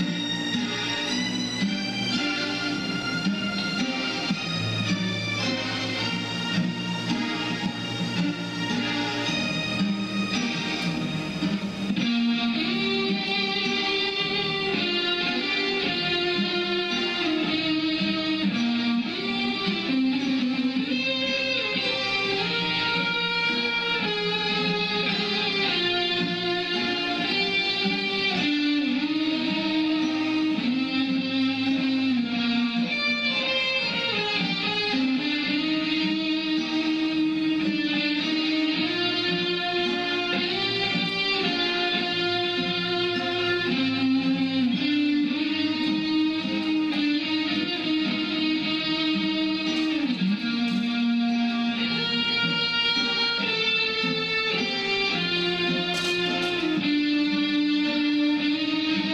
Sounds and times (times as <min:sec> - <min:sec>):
Electric guitar: 0:00.0 - 0:59.1.